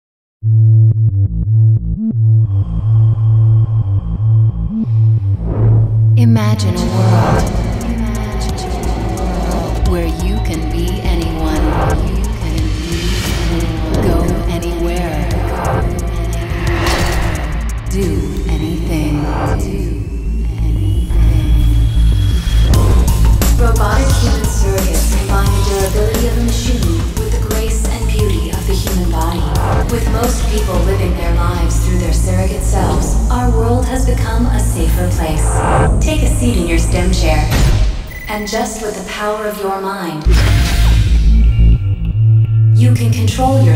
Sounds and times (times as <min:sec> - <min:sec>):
Music: 0:01.0 - 0:43.7
Speech: 0:06.2 - 0:17.0, 0:17.9 - 0:21.7, 0:23.6 - 0:40.7, 0:42.8 - 0:43.7.